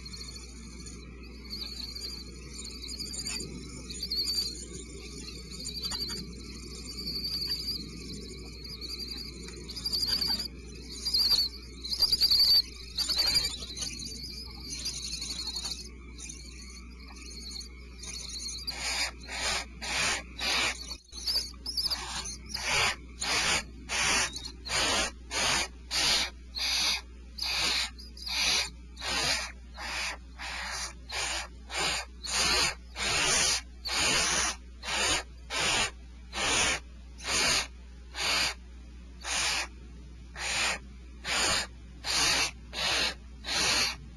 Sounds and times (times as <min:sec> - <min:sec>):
Owl: 0:00.0 - 0:38.6, 0:39.2 - 0:44.0.